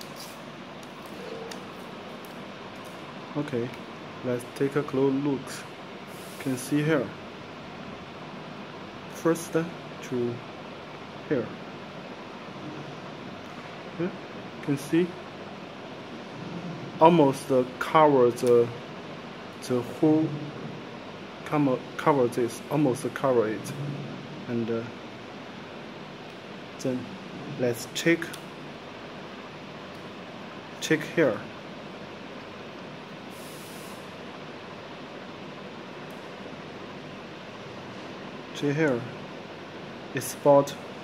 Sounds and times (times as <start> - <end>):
Speech: 3.3 - 5.7, 6.4 - 7.2, 9.1 - 10.4, 11.3 - 11.6, 14.0 - 15.2, 17.0 - 18.8, 19.6 - 20.5, 21.5 - 23.8, 24.5 - 25.0, 26.8 - 28.4, 30.8 - 31.5, 38.6 - 39.2, 40.2 - 40.8.